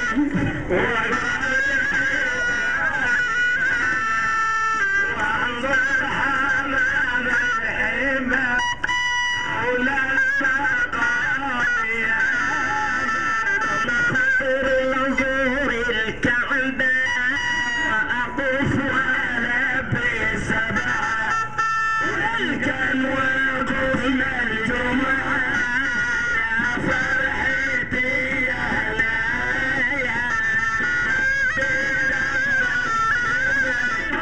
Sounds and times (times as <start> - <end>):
Music: 0.0 - 34.2.